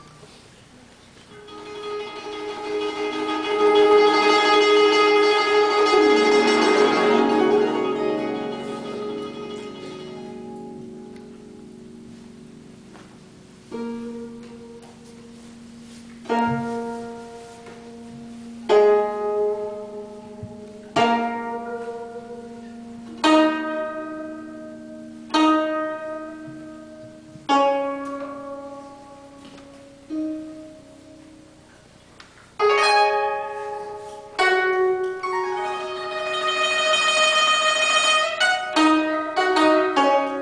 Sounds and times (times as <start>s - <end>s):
Pizzicato: 0.0s - 40.4s
Zither: 0.0s - 40.4s.